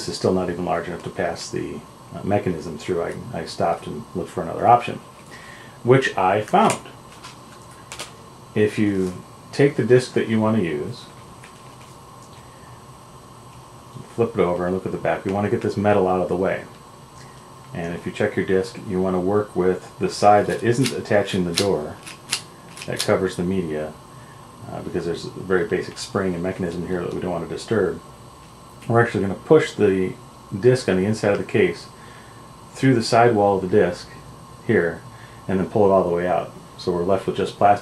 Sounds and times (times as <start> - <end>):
Speech: 0.0 - 5.1, 5.8 - 7.0, 8.6 - 11.1, 14.0 - 16.8, 17.7 - 22.0, 22.8 - 24.0, 24.6 - 28.1, 28.8 - 32.0, 32.7 - 37.8.